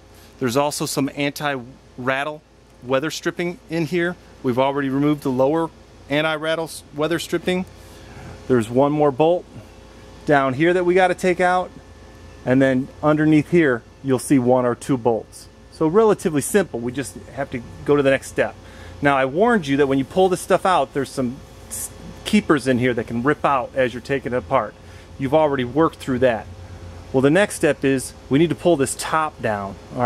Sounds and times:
Speech: 0.4 - 7.7, 8.5 - 9.5, 10.3 - 11.8, 12.4 - 26.5, 27.2 - 30.0.

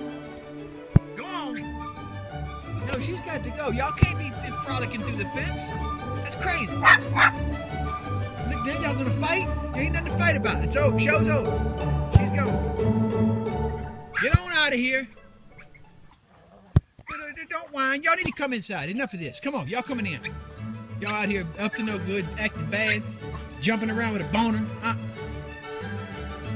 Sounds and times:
Music: 0.0 - 16.1, 19.7 - 26.5
Outside, urban or manmade: 0.0 - 26.5
Speech: 2.8 - 6.8, 8.5 - 11.5, 12.2 - 12.6, 14.2 - 15.1, 17.1 - 20.3, 21.0 - 23.0, 23.6 - 25.0.

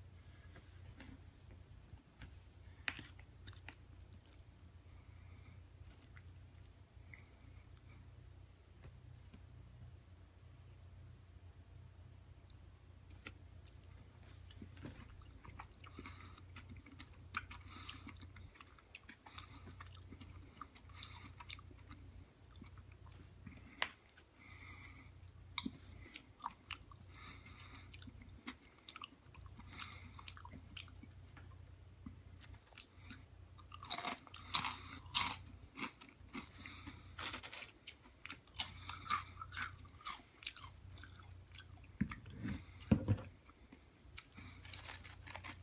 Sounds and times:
Chewing, mastication: 1.8 - 8.1, 12.5 - 45.6.

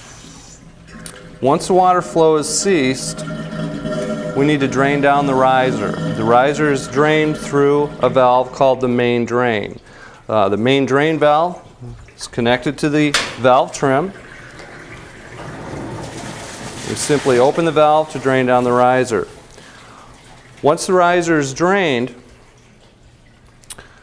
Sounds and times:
Speech: 1.4 - 3.3, 4.3 - 14.2, 16.8 - 19.4, 20.6 - 22.2.

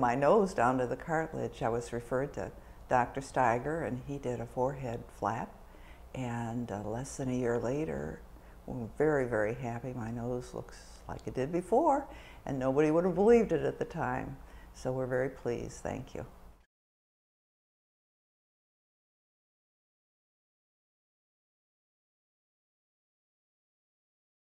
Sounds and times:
Speech: 0.0 - 5.6, 6.2 - 16.4.

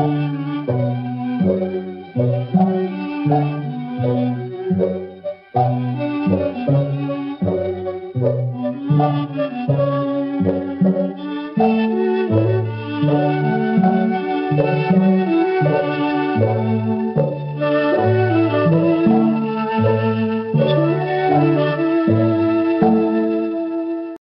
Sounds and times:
Music: 0.0 - 24.2.

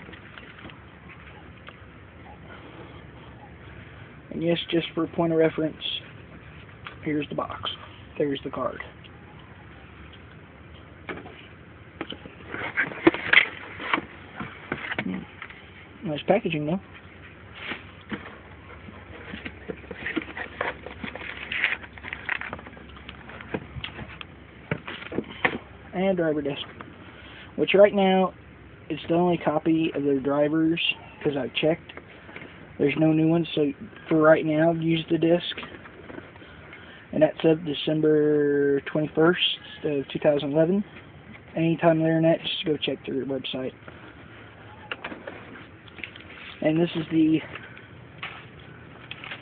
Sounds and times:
Speech: 4.3 - 6.1, 7.0 - 9.0, 16.0 - 16.9, 25.9 - 26.8, 27.6 - 31.8, 32.8 - 35.7, 37.1 - 40.9, 41.6 - 43.8, 46.6 - 47.6.

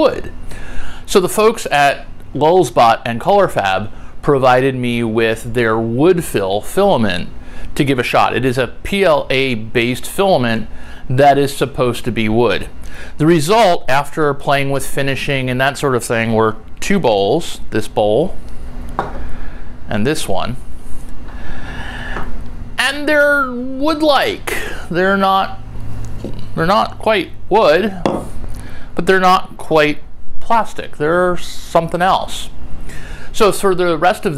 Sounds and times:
Speech: 0.0 - 0.3, 1.1 - 18.4, 19.9 - 20.6, 22.8 - 25.6, 26.6 - 28.3, 29.0 - 32.6, 33.3 - 34.3.

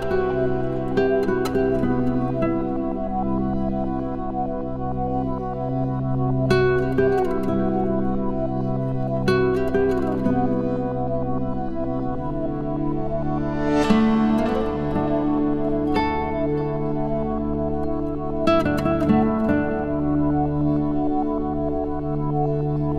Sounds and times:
Music: 0.0 - 22.9.

